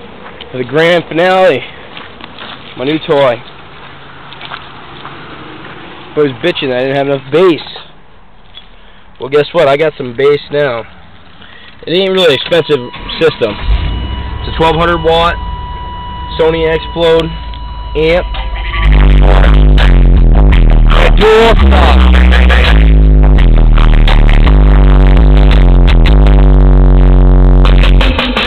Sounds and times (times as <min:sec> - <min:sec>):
Speech: 0:00.5 - 0:01.7, 0:02.8 - 0:03.5, 0:06.2 - 0:08.0, 0:09.2 - 0:10.9, 0:11.8 - 0:13.7, 0:14.4 - 0:15.4, 0:16.3 - 0:17.4, 0:18.0 - 0:18.4, 0:19.1 - 0:19.6, 0:20.9 - 0:22.2
Beep, bleep: 0:12.5 - 0:18.7.